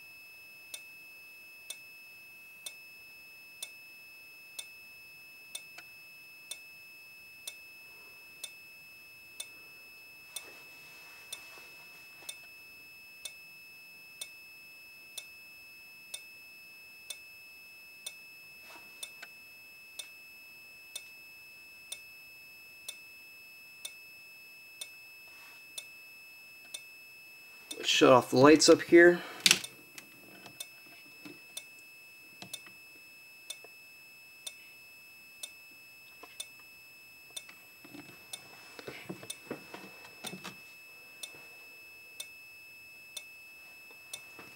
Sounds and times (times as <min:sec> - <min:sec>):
Fire alarm: 0:00.0 - 0:44.5.